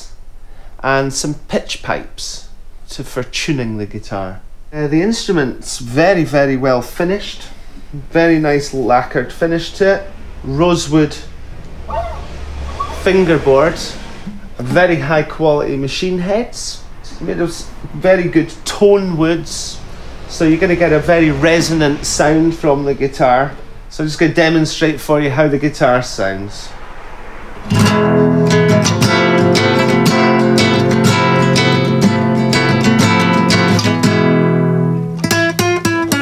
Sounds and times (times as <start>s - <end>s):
Speech: 0.8s - 11.3s, 12.8s - 26.8s.